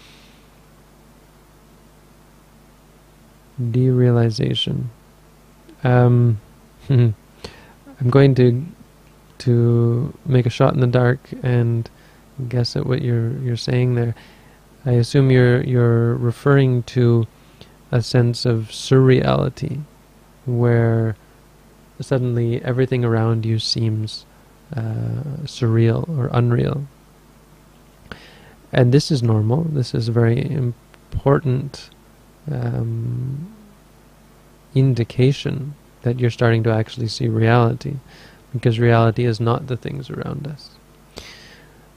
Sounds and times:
Speech: 0:03.6 - 0:05.0, 0:05.7 - 0:07.2, 0:07.9 - 0:08.8, 0:09.4 - 0:14.2, 0:14.8 - 0:17.3, 0:17.9 - 0:21.2, 0:22.0 - 0:26.9, 0:28.7 - 0:33.7, 0:34.7 - 0:40.8.

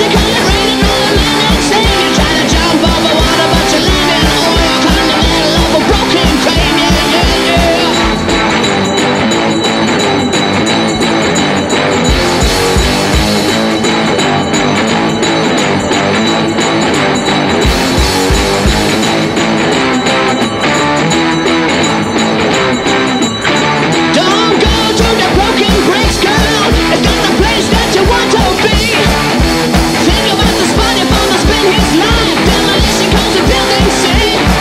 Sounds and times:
Punk rock: 0:00.0 - 0:34.6.

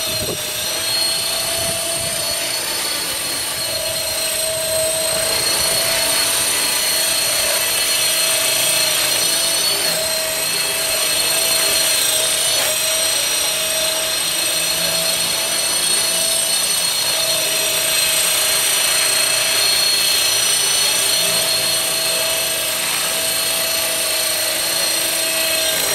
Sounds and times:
Helicopter: 0:00.0 - 0:25.9.

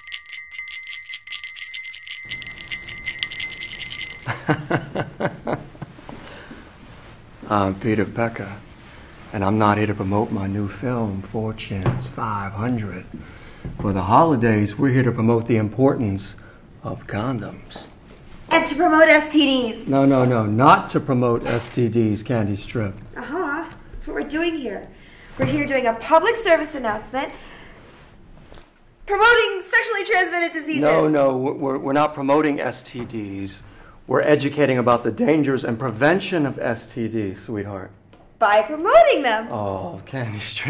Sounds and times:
Speech: 0:30.7 - 0:37.7.

